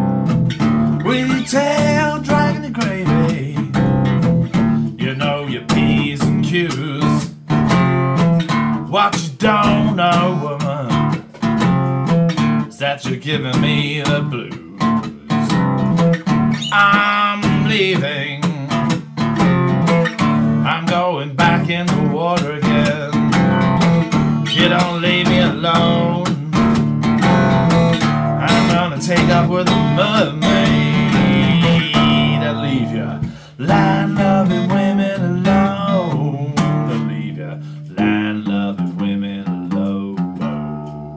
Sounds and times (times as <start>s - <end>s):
Steel guitar, slide guitar: 13.9s - 20.8s, 21.9s - 34.5s.